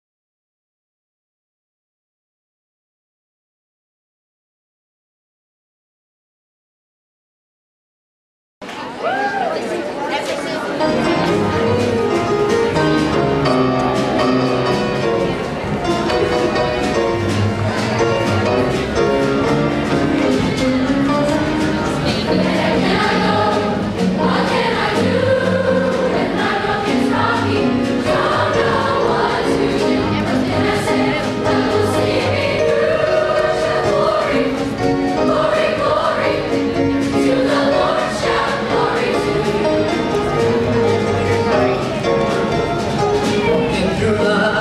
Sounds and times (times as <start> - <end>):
Music: 8.7 - 44.6.